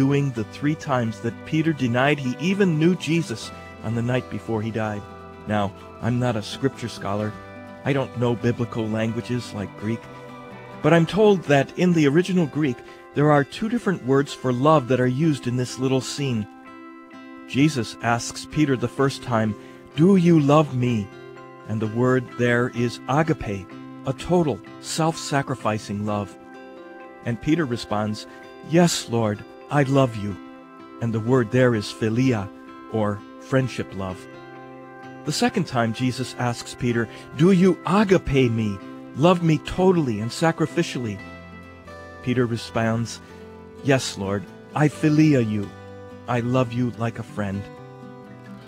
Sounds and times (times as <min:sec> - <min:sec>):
Speech: 0:00.0 - 0:10.1, 0:10.8 - 0:16.5, 0:17.5 - 0:21.1, 0:21.7 - 0:26.4, 0:27.2 - 0:30.4, 0:31.0 - 0:34.3, 0:35.3 - 0:41.2, 0:42.2 - 0:43.2, 0:43.8 - 0:45.7, 0:46.3 - 0:47.7
Music: 0:00.0 - 0:48.6.